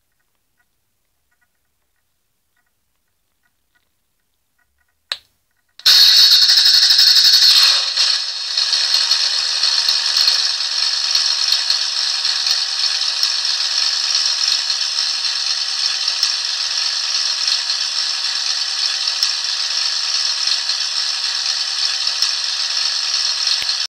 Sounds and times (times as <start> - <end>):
Idling: 5.8 - 23.8
Medium engine (mid frequency): 5.9 - 23.8.